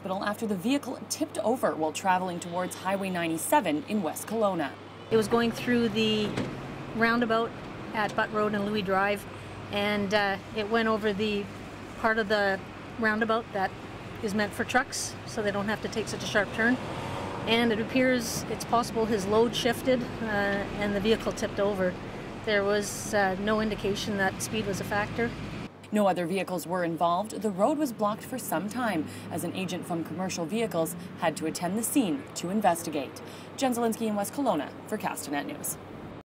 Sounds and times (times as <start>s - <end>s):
Speech: 0.0s - 6.4s, 7.0s - 9.2s, 9.8s - 16.8s, 17.5s - 35.8s
Car: 4.8s - 25.8s, 27.7s - 33.8s.